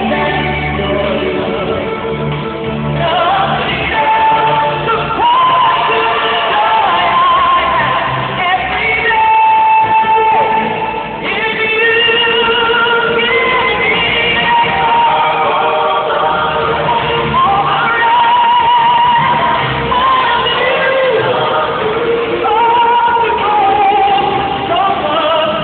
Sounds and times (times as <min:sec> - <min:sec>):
Music: 0:00.0 - 0:25.6.